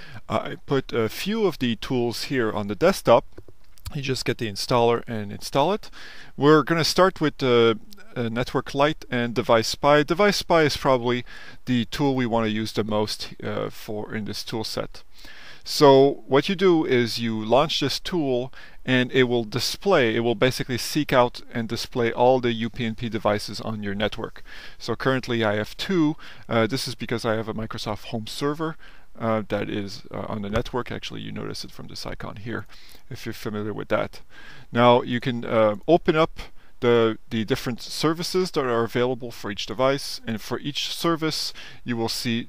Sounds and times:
Speech: 0.3 - 3.2, 3.9 - 15.0, 15.7 - 42.4.

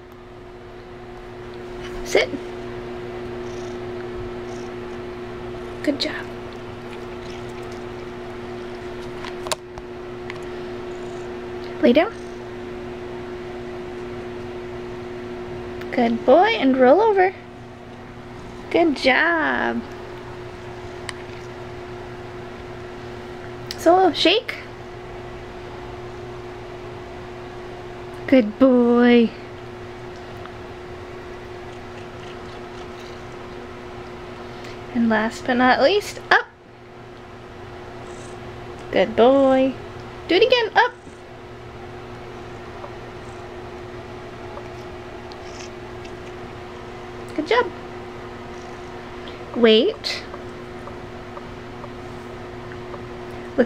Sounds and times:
Speech: 2.0 - 2.4, 5.8 - 6.3, 11.8 - 12.2, 15.8 - 17.4, 18.7 - 19.9, 23.7 - 24.7, 28.3 - 29.4, 34.9 - 36.5, 38.9 - 41.0, 47.3 - 47.7, 49.6 - 50.3.

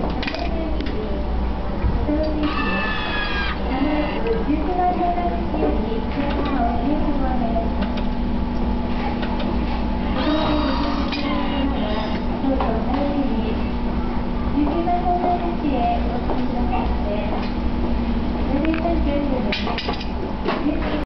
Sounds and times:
Speech: 0.1 - 3.0, 3.6 - 7.9, 8.9 - 17.6, 18.4 - 21.0.

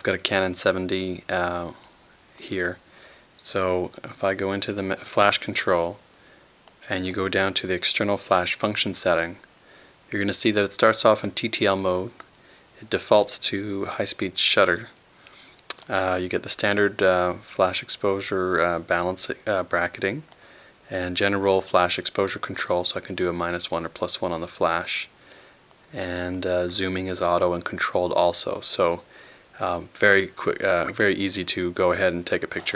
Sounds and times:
Speech: 0.0 - 2.8, 3.4 - 6.0, 6.8 - 9.5, 10.1 - 15.0, 15.7 - 20.3, 20.9 - 25.2, 25.9 - 32.7.

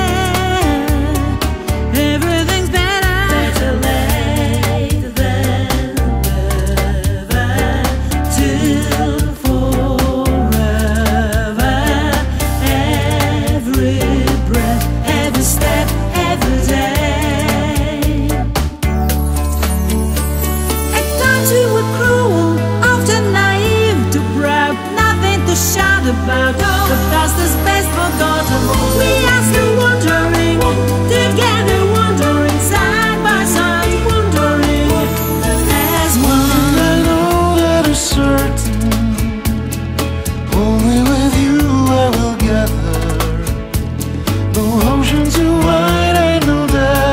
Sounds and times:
Singing: 0.0 - 18.4, 21.0 - 39.6, 40.5 - 43.8, 44.6 - 47.1
Music: 0.0 - 47.1.

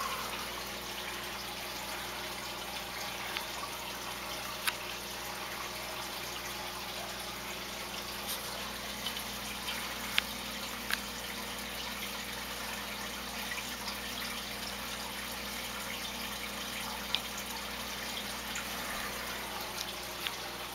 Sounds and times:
Stream: 0.0 - 20.7.

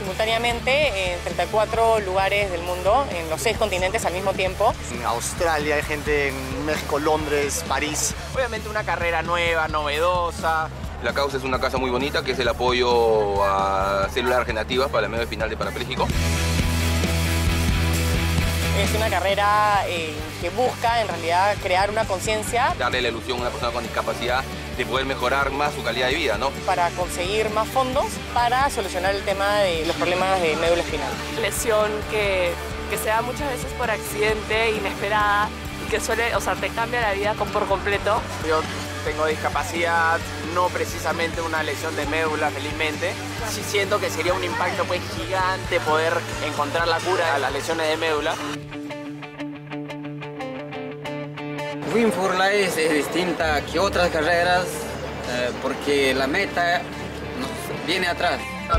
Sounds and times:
Speech: 0.0 - 16.1, 18.8 - 48.6
Music: 0.0 - 58.7
Outside, urban or manmade: 0.0 - 58.7.

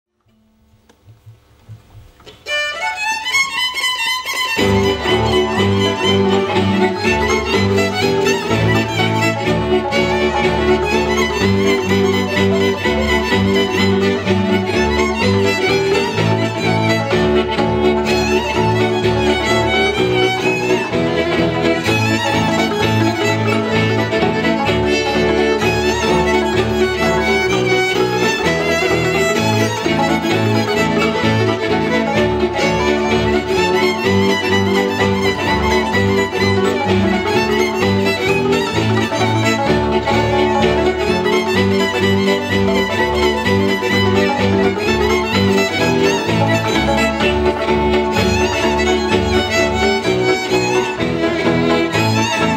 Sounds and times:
Classical music: 2.1 - 52.5
Violin, fiddle: 2.3 - 52.5.

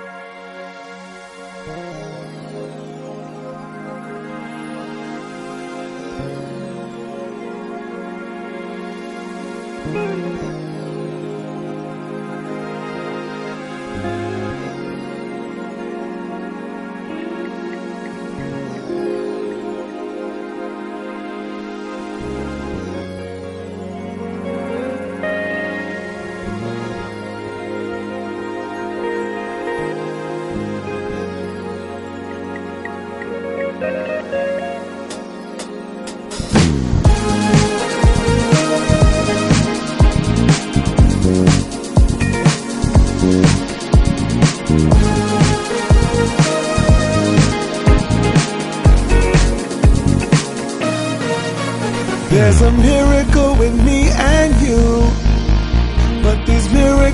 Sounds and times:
Music: 0.0 - 57.1.

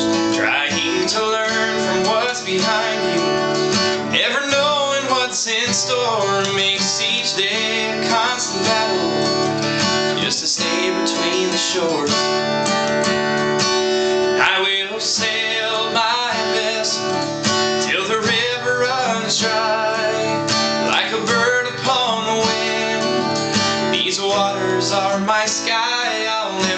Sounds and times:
Independent music: 0.0 - 26.7.

